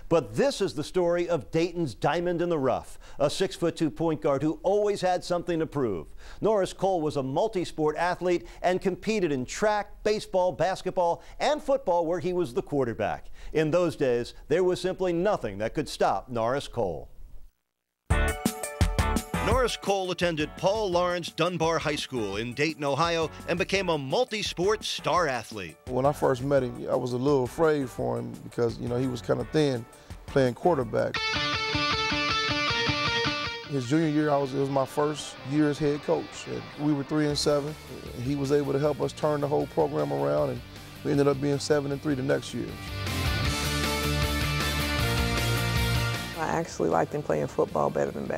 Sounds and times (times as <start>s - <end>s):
Speech: 0.1s - 17.1s, 19.4s - 31.2s, 33.7s - 42.8s, 46.4s - 48.3s
Music: 18.1s - 48.3s.